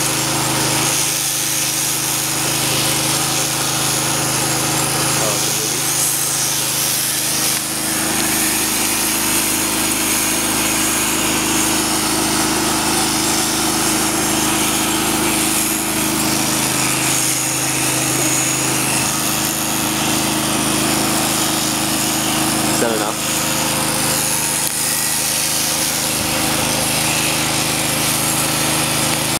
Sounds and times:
Speech: 5.2s - 5.9s, 22.7s - 23.2s.

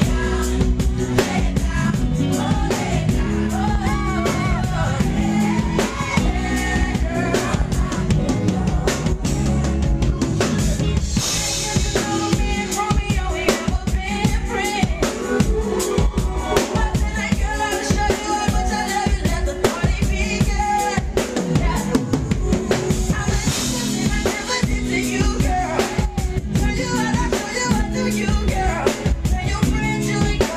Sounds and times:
Soul music: 0.0s - 30.5s.

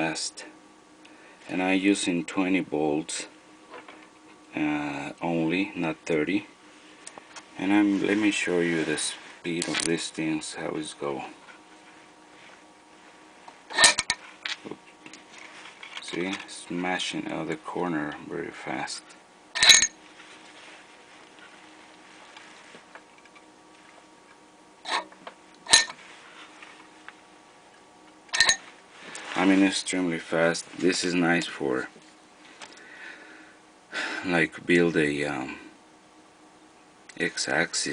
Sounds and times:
Speech: 0.0s - 0.6s, 1.5s - 3.4s, 4.5s - 6.5s, 7.6s - 11.4s, 16.0s - 19.2s, 29.4s - 32.0s, 34.2s - 35.7s, 37.1s - 37.9s.

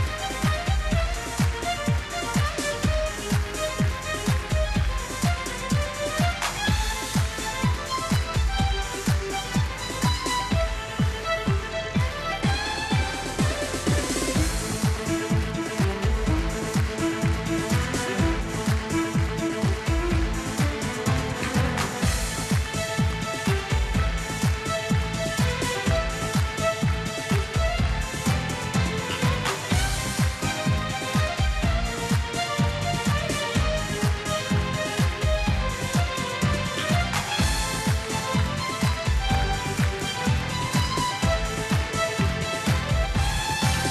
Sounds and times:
Violin, fiddle: 0.0s - 43.9s.

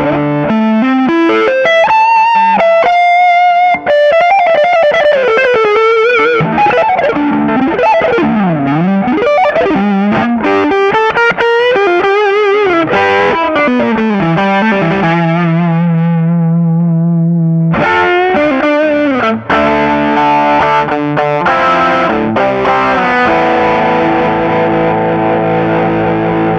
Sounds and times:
Effects unit: 0.0s - 26.5s
Electric guitar: 0.0s - 26.5s.

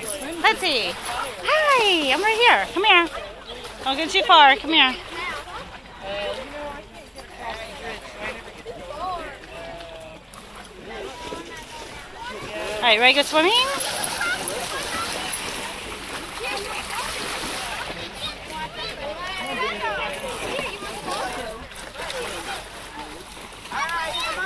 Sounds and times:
Splash, splatter: 13.5s - 18.9s.

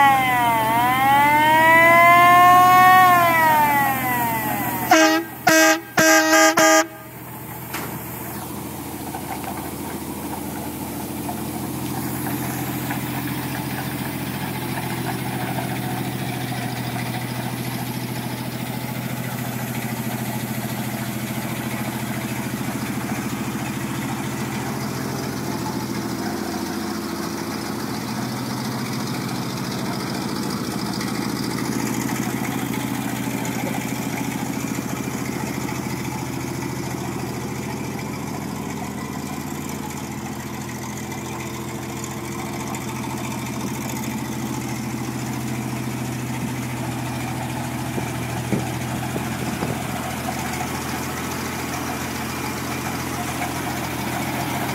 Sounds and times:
Truck: 0.0s - 54.7s.

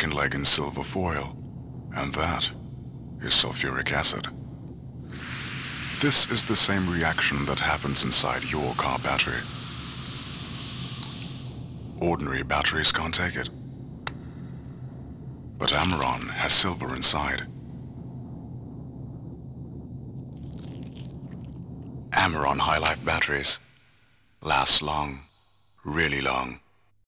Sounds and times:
Speech: 0.0s - 2.6s, 3.2s - 4.3s, 6.0s - 9.5s, 12.0s - 13.5s, 15.6s - 17.5s, 22.1s - 23.6s, 24.4s - 26.7s.

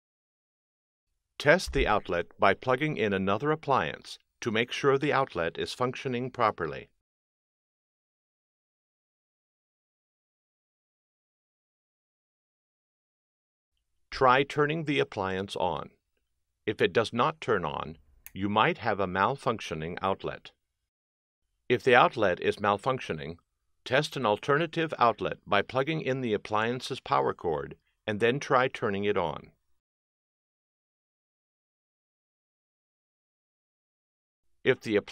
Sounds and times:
Speech: 1.4s - 7.0s, 14.2s - 16.0s, 16.7s - 20.6s, 21.7s - 29.6s, 34.7s - 35.1s.

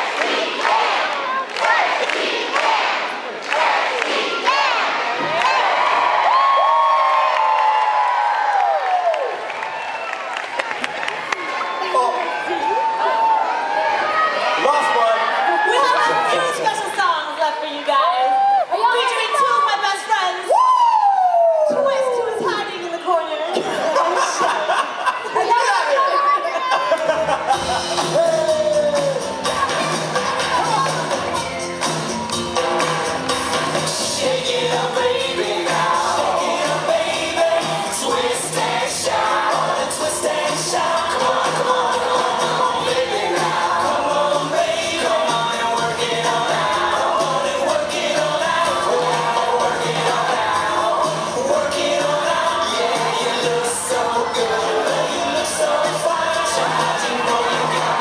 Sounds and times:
Whoop: 5.7s - 10.4s, 11.6s - 14.4s, 18.2s - 18.8s, 20.5s - 22.2s, 28.2s - 29.4s.

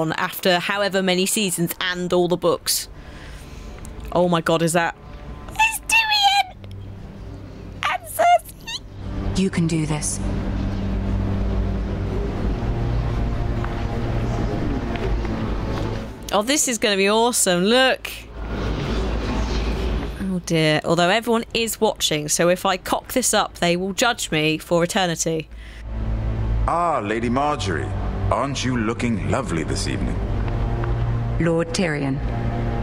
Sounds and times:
Music: 0.0s - 20.2s, 21.4s - 32.8s.

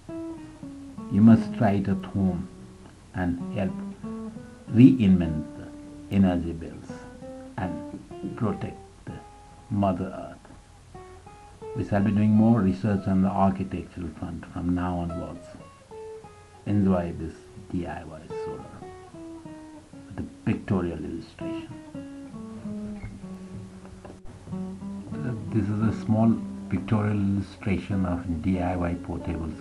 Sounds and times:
Music: 0.0s - 29.6s
Speech: 1.1s - 2.5s, 3.2s - 3.8s, 4.7s - 10.5s, 11.8s - 15.6s, 16.7s - 18.9s, 20.1s - 21.8s, 25.1s - 29.6s.

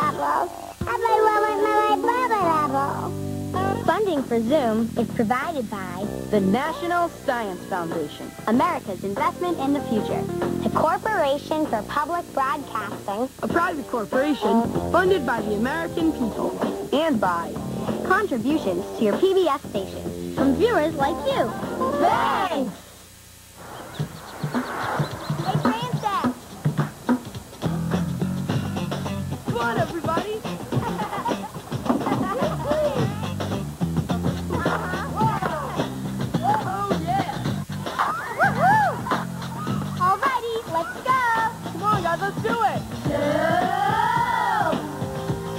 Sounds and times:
Speech: 0.0s - 22.8s, 25.5s - 26.4s, 29.5s - 30.5s
Music: 0.0s - 22.9s, 24.0s - 45.5s.

